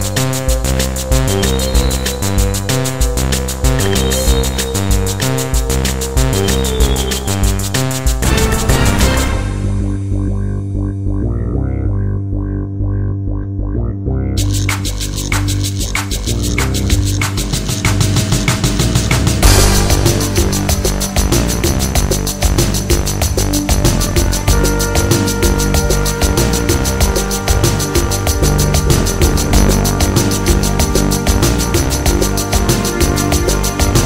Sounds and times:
Drum and bass: 0:00.0 - 0:34.0.

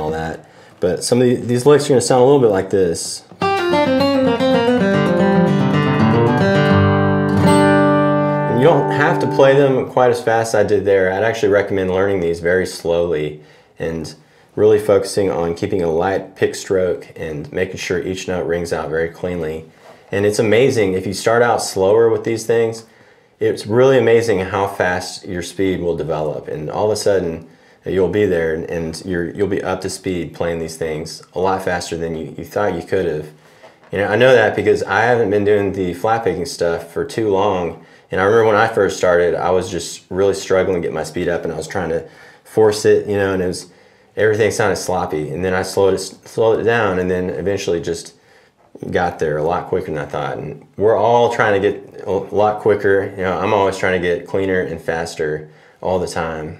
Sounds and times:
Speech: 0:00.0 - 0:03.4, 0:08.5 - 0:56.5.

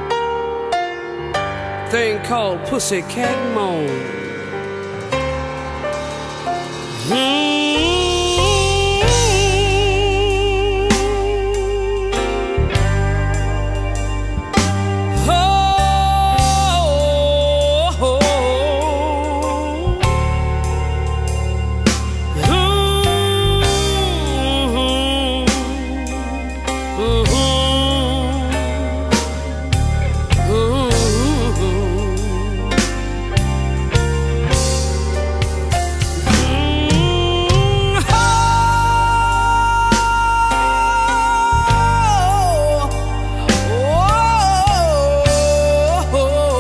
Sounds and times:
Music: 0:00.0 - 0:46.6.

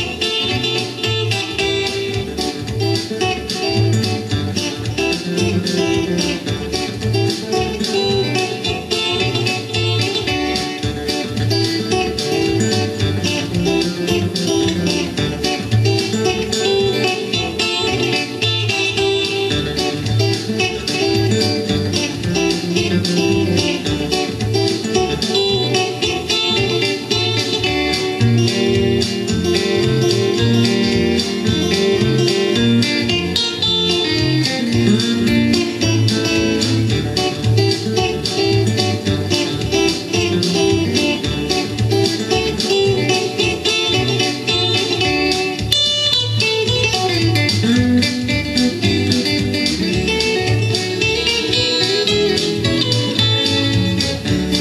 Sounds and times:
Guitar: 0:00.0 - 0:54.6.

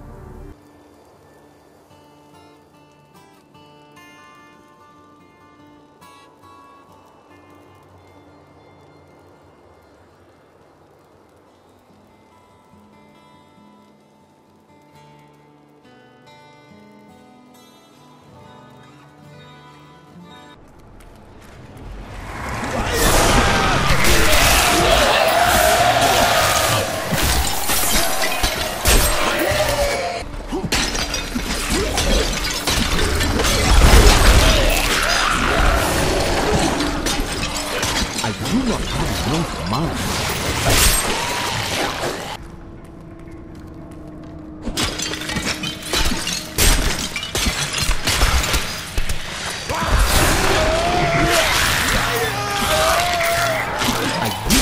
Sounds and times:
Music: 0:00.0 - 0:20.8, 0:24.0 - 0:54.6.

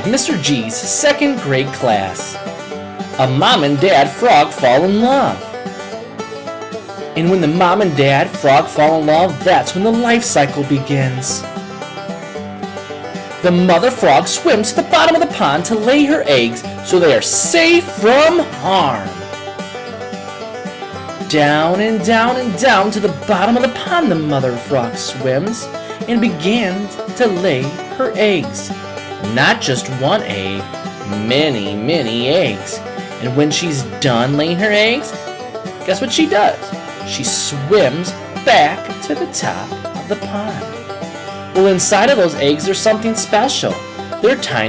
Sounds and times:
Speech: 0:00.0 - 0:02.4, 0:03.2 - 0:05.5, 0:07.2 - 0:11.5, 0:13.4 - 0:19.2, 0:21.2 - 0:35.2, 0:35.8 - 0:40.8, 0:41.6 - 0:44.6
Music: 0:00.0 - 0:44.6.

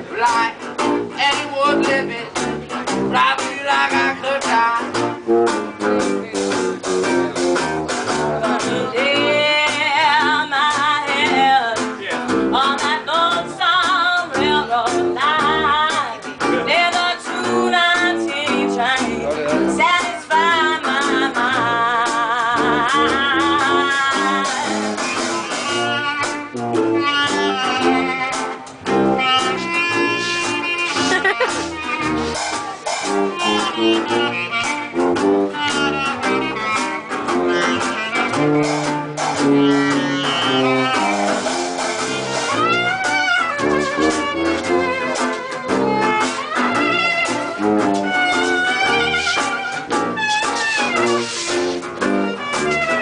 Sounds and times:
Jazz: 0:00.0 - 0:53.0
Speech: 0:05.8 - 0:09.5, 0:19.0 - 0:19.8.

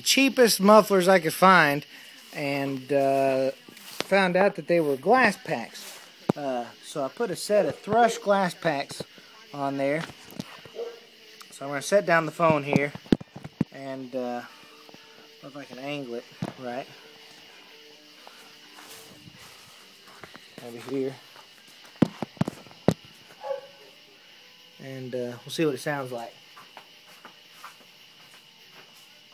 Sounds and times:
Speech: 0:00.0 - 0:01.8, 0:02.4 - 0:05.8, 0:06.4 - 0:09.0, 0:11.6 - 0:13.0, 0:13.8 - 0:14.5, 0:15.5 - 0:16.9, 0:20.6 - 0:21.2, 0:24.8 - 0:26.4.

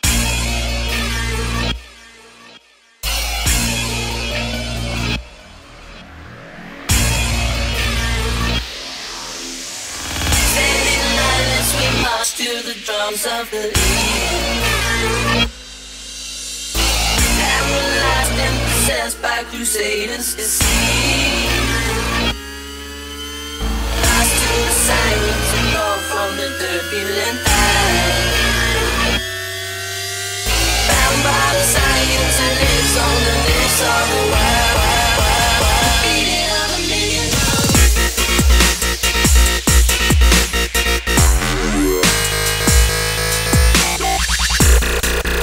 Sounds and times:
Music: 0:00.0 - 0:45.4.

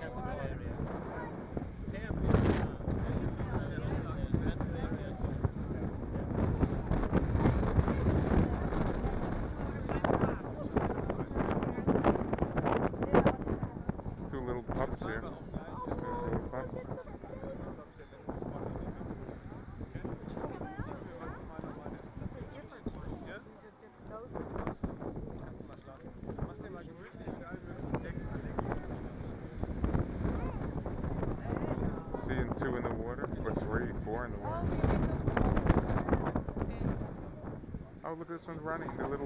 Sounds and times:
Speech: 0:00.0 - 0:06.5, 0:07.9 - 0:29.6, 0:31.3 - 0:39.2.

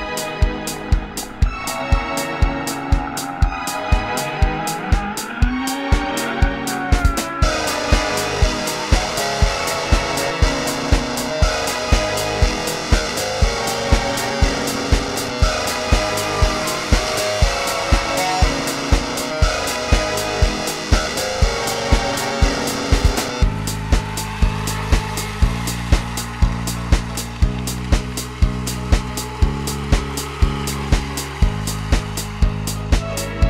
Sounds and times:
Music: 0:00.0 - 0:33.5.

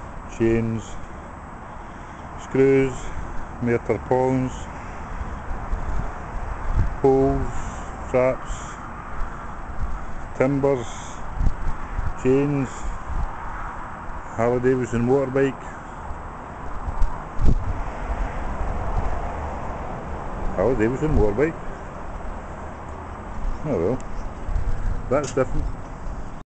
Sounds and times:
Vehicle: 0:00.0 - 0:26.4
Speech: 0:00.3 - 0:01.0, 0:02.4 - 0:04.7, 0:07.0 - 0:08.7, 0:10.4 - 0:11.1, 0:12.2 - 0:12.8, 0:14.3 - 0:15.8, 0:20.6 - 0:21.6, 0:23.6 - 0:24.0, 0:25.1 - 0:25.7.

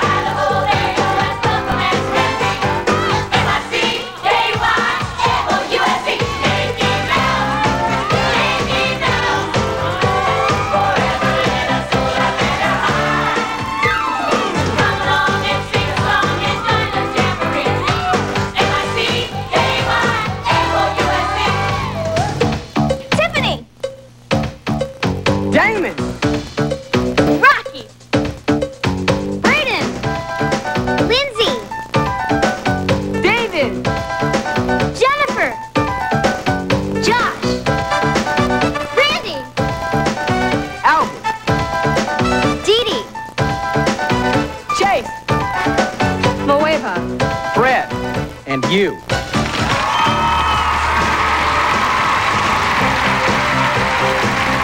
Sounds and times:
Music: 0:00.0 - 0:54.6.

